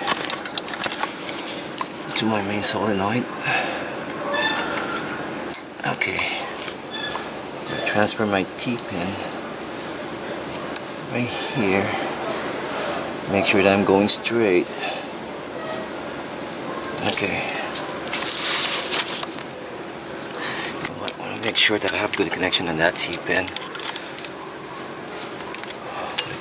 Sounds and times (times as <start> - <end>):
Speech: 2.1 - 3.3, 5.8 - 6.5, 7.7 - 9.2, 13.3 - 14.7, 17.0 - 17.7, 21.0 - 23.6.